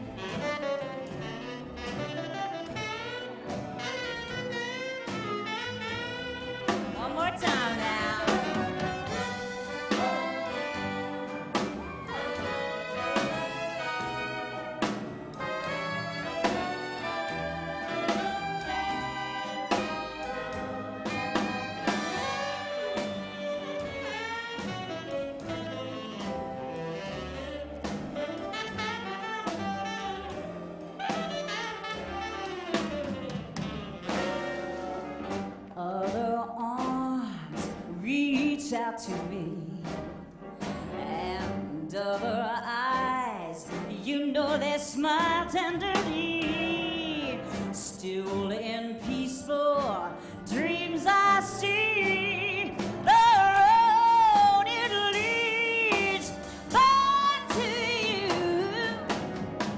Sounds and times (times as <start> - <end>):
Orchestra: 0.0 - 59.7.